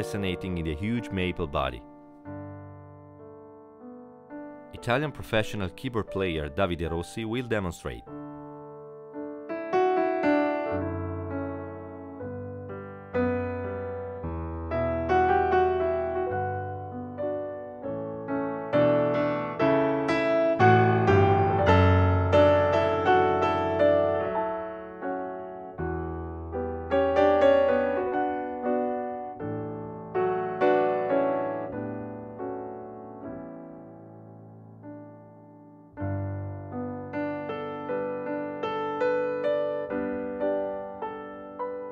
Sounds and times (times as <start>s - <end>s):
Electric piano: 0.0s - 41.9s.